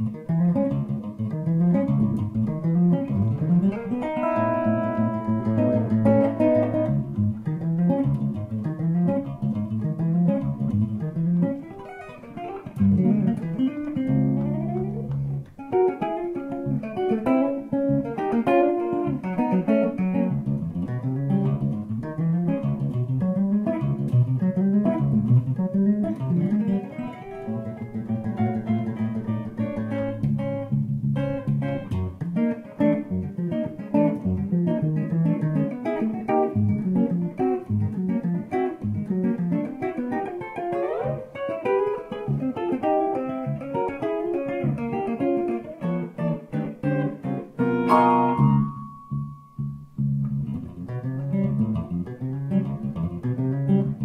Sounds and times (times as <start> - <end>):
Guitar: 0.0 - 54.0.